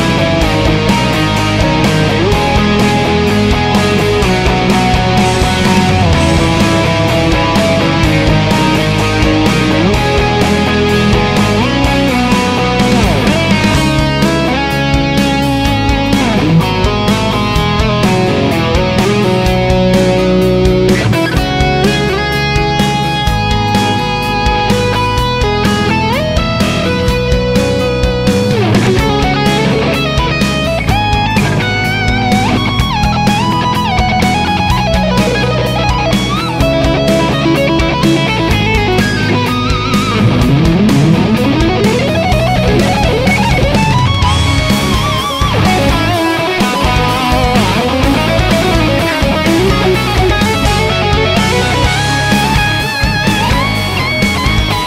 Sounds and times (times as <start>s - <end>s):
Bass guitar: 0.0s - 54.8s
Strum: 0.0s - 54.8s.